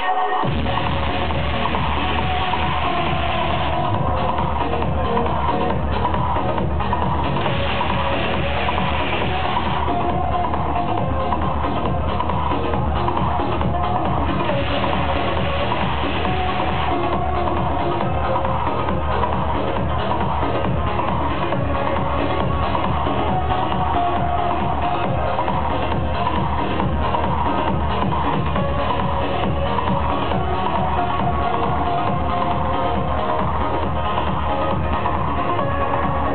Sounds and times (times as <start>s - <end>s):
Music: 0.0s - 36.3s.